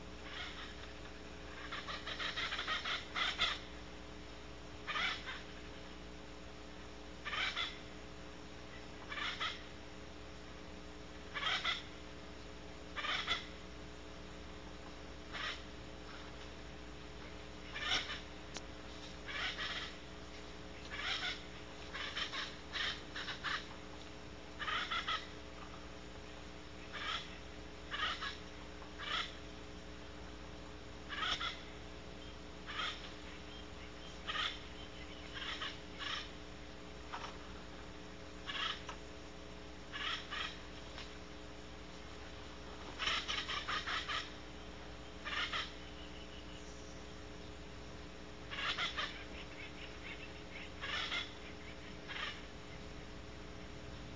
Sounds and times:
Owl: 0:00.1 - 0:03.8, 0:04.8 - 0:05.9, 0:07.2 - 0:08.0, 0:08.7 - 0:09.8, 0:11.3 - 0:12.0, 0:12.9 - 0:13.6, 0:15.3 - 0:16.4, 0:17.2 - 0:18.4, 0:19.0 - 0:20.1, 0:20.7 - 0:23.8, 0:24.6 - 0:29.6, 0:31.1 - 0:36.4, 0:38.4 - 0:39.0, 0:39.8 - 0:41.1, 0:42.7 - 0:47.5, 0:48.4 - 0:53.8.

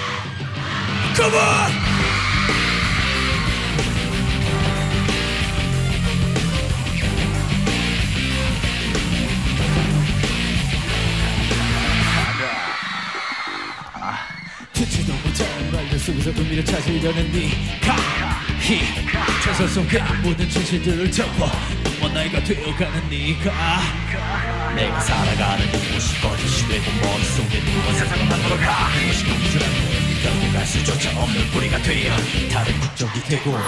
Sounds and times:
Exciting music: 0:00.0 - 0:33.6.

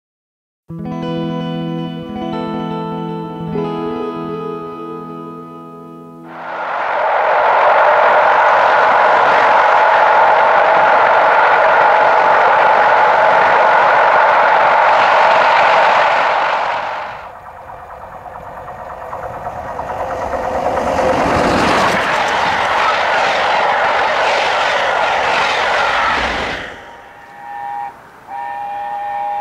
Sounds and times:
Train: 0:02.1 - 0:04.8, 0:06.2 - 0:29.4.

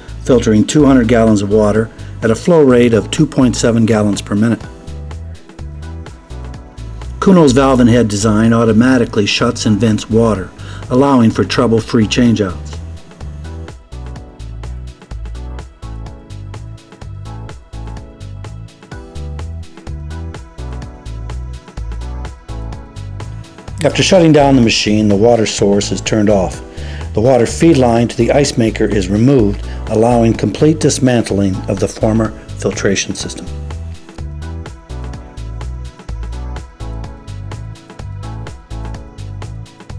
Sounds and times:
Music: 0:00.0 - 0:39.9
Speech: 0:00.2 - 0:04.7, 0:07.2 - 0:12.8, 0:23.8 - 0:33.6.

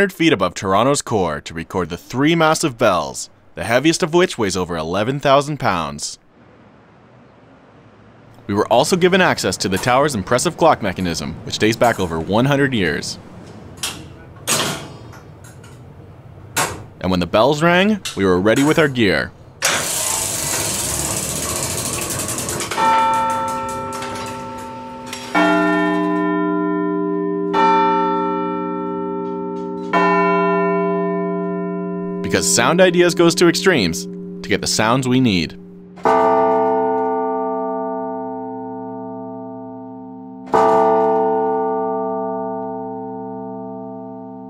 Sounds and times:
Speech: 0:00.0 - 0:06.2, 0:08.5 - 0:13.2, 0:17.0 - 0:19.4, 0:32.2 - 0:35.6
Bell: 0:20.7 - 0:44.4
Reverberation: 0:20.8 - 0:44.4.

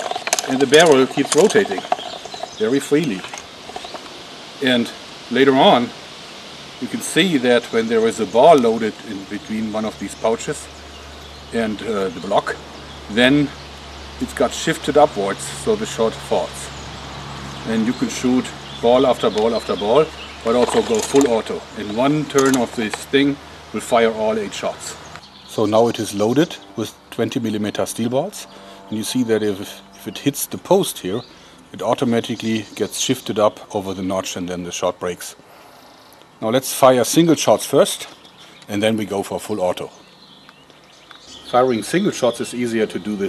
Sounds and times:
Outside, rural or natural: 0:00.0 - 0:43.2
Speech: 0:00.4 - 0:01.9, 0:02.6 - 0:03.3, 0:04.6 - 0:06.0, 0:06.8 - 0:10.7, 0:11.5 - 0:13.6, 0:14.2 - 0:16.8, 0:17.6 - 0:35.4, 0:36.4 - 0:40.0, 0:41.5 - 0:43.2.

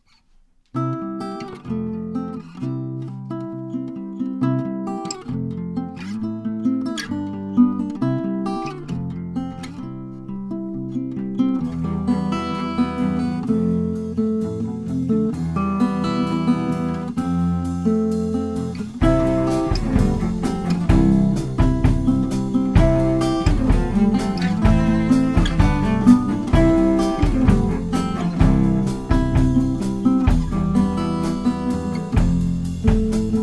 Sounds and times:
Steel guitar, slide guitar: 0:07.0 - 0:33.4
Drum roll: 0:18.5 - 0:33.4.

